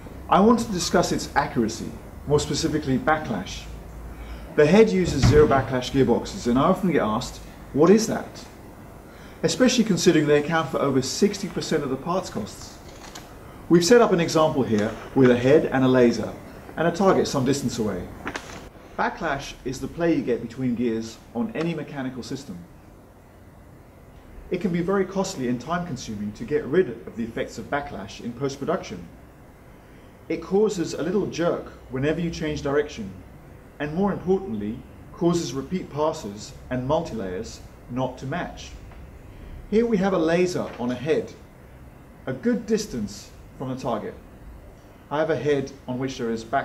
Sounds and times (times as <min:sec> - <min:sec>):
Speech: 0:00.3 - 0:03.8, 0:04.6 - 0:08.6, 0:09.4 - 0:12.8, 0:13.7 - 0:18.1, 0:19.0 - 0:22.7, 0:24.5 - 0:29.2, 0:30.3 - 0:33.2, 0:33.8 - 0:38.8, 0:39.7 - 0:41.4, 0:42.2 - 0:44.2, 0:45.1 - 0:46.6.